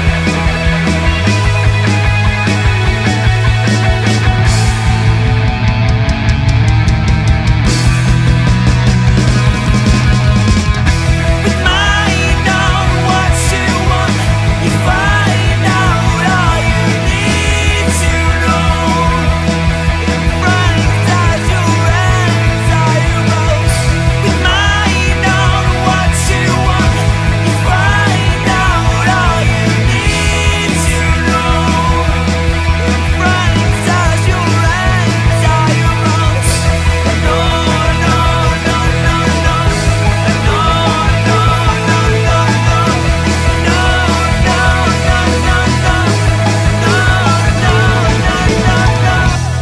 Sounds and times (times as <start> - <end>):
Independent music: 0.0 - 49.6
Singing: 11.4 - 49.6.